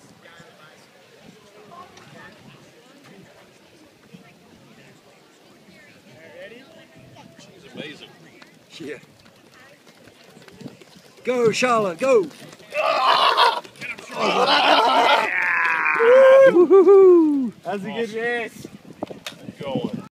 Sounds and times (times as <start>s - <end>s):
Run: 6.0s - 20.1s.